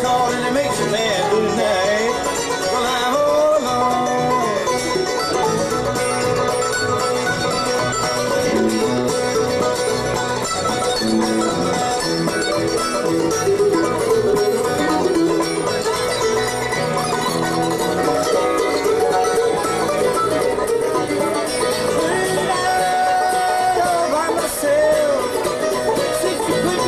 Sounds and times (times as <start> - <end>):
Bluegrass: 0.0 - 26.8
Traditional music: 0.0 - 26.8.